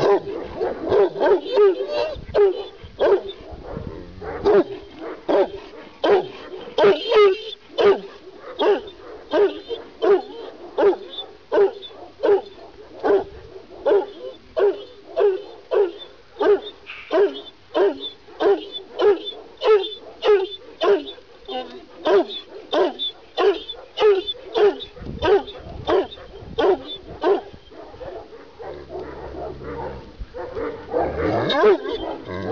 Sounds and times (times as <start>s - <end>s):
Bow-wow: 0.0s - 32.5s
Yip: 8.6s - 29.1s.